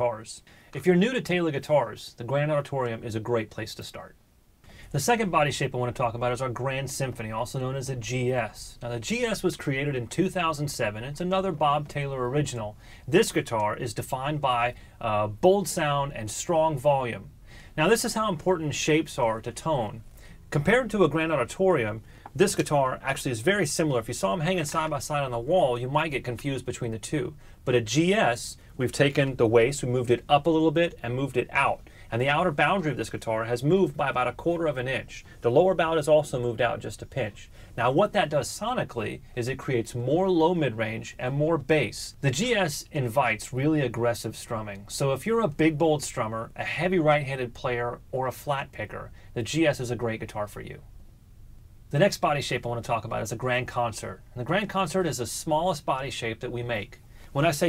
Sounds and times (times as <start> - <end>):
Speech: 0.0 - 4.2, 4.9 - 50.9, 51.9 - 57.6.